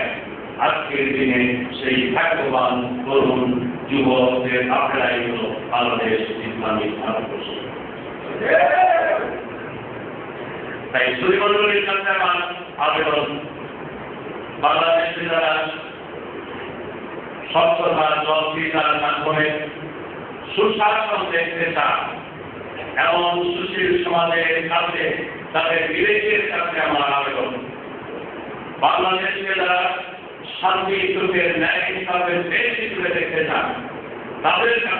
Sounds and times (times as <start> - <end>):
Male speech, man speaking: 0.0 - 7.6, 10.9 - 13.5, 14.6 - 15.9, 17.5 - 19.8, 20.5 - 22.2, 23.0 - 27.7, 28.8 - 34.9.